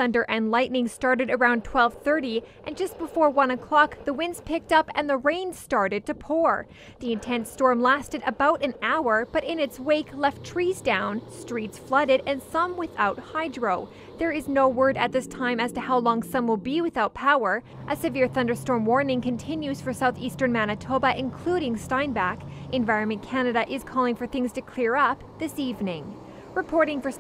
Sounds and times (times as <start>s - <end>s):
Speech: 0.0s - 27.2s.